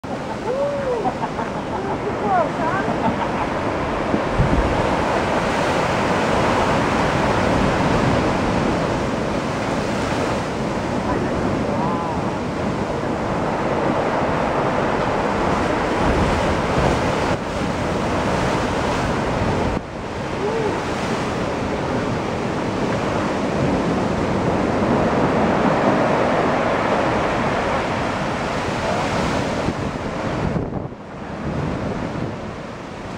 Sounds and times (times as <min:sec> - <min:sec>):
Waves, surf: 0:00.0 - 0:33.1.